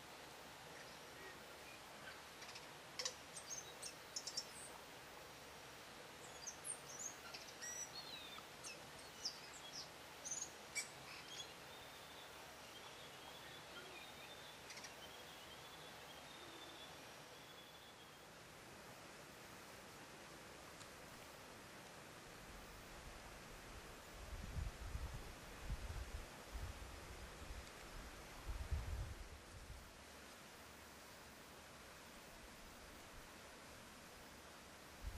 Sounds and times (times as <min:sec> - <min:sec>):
Bird vocalization, bird call, bird song: 0:01.6 - 0:04.8, 0:06.2 - 0:18.3.